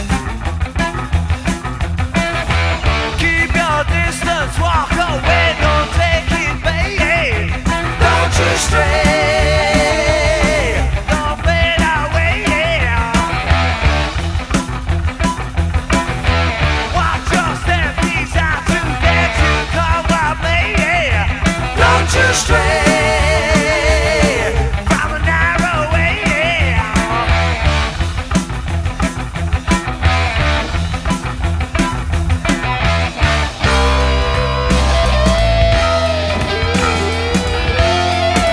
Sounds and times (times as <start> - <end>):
Heavy metal: 0.0 - 38.5
Independent music: 0.0 - 38.5.